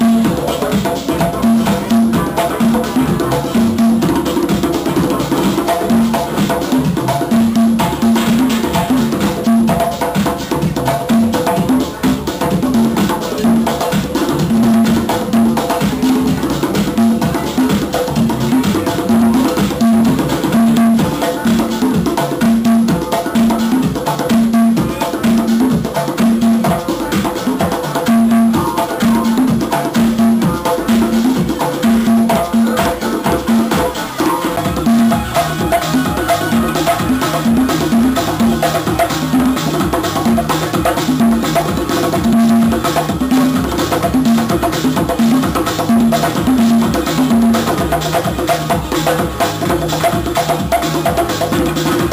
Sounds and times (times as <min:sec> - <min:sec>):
Drum: 0:00.0 - 0:52.1
Inside, large room or hall: 0:00.0 - 0:52.1
Wood block: 0:00.0 - 0:52.1.